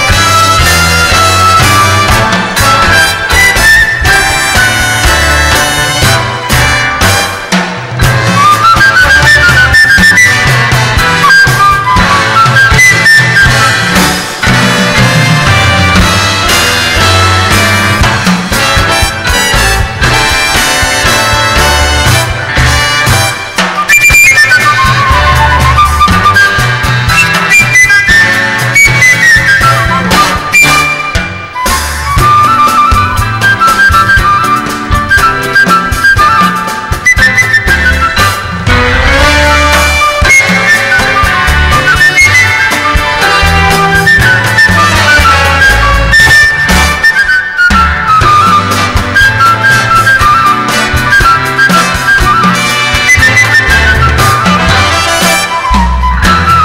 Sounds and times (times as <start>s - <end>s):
Flute: 0.0s - 56.6s.